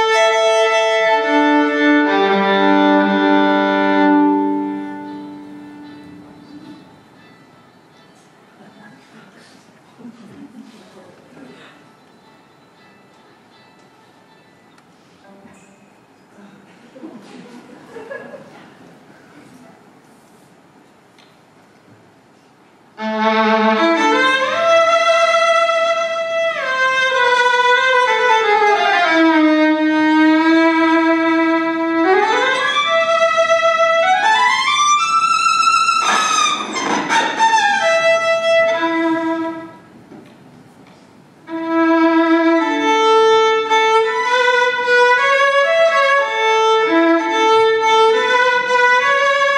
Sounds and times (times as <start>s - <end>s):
Music: 0.0s - 9.5s, 11.6s - 16.1s, 23.0s - 40.0s, 41.5s - 49.5s.